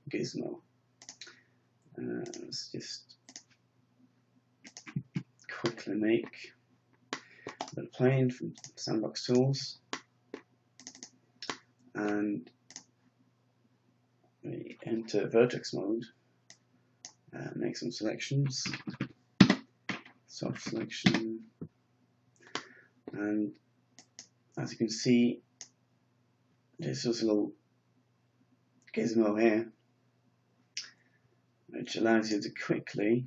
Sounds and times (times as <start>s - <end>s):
Speech: 0.0s - 0.6s, 2.0s - 3.2s, 4.7s - 6.6s, 7.7s - 9.9s, 11.4s - 12.5s, 14.4s - 16.2s, 17.3s - 19.0s, 20.3s - 21.6s, 23.1s - 23.6s, 24.6s - 25.5s, 26.8s - 27.6s, 28.9s - 29.8s, 31.7s - 33.2s.